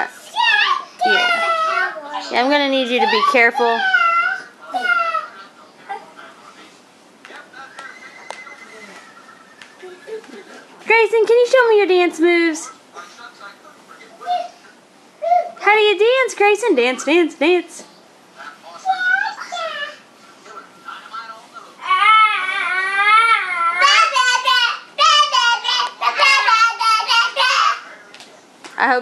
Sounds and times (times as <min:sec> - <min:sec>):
Child speech, kid speaking: 0:00.0 - 0:05.3, 0:18.7 - 0:20.0, 0:23.4 - 0:27.9.